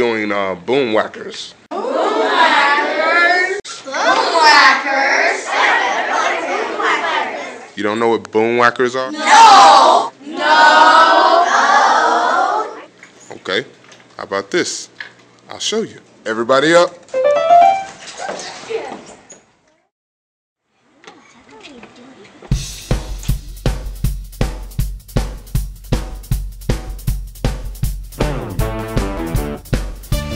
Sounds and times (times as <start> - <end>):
Music: 17.1 - 17.9, 22.5 - 30.3.